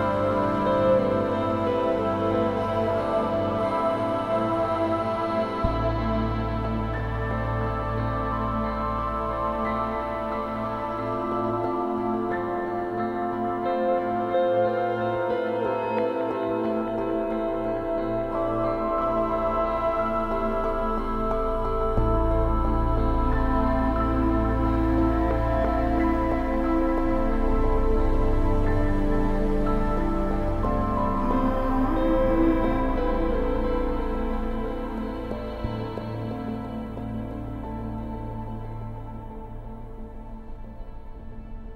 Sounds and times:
Ambient music: 0:00.0 - 0:41.7.

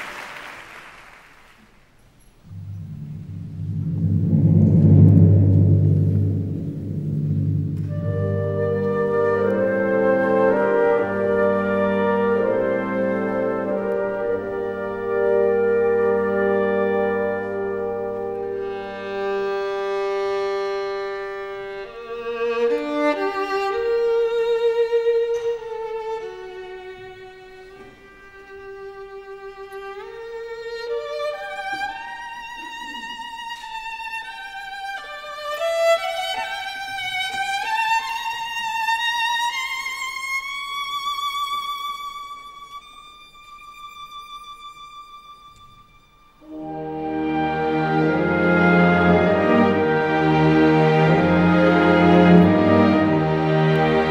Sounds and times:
Violin, fiddle: 0:07.8 - 0:54.1.

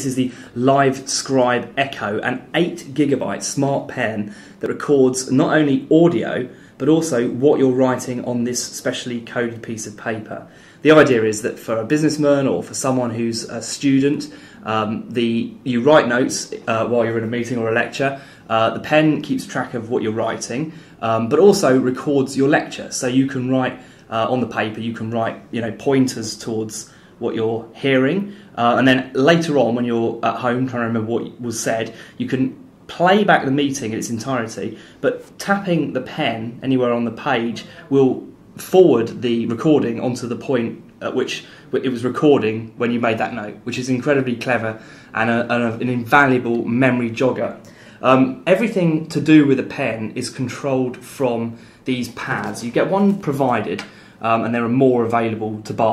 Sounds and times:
Speech: 0:00.0 - 0:55.9.

